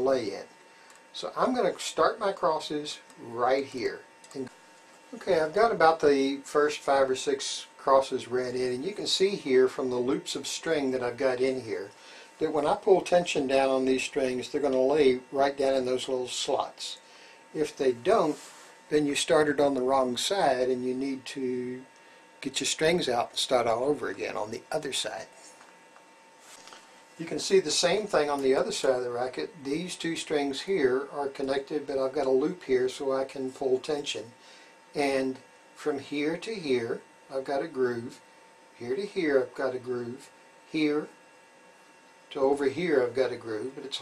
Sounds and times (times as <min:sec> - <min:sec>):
Speech: 0:00.0 - 0:25.4, 0:27.2 - 0:38.2, 0:38.8 - 0:41.2, 0:42.3 - 0:44.0.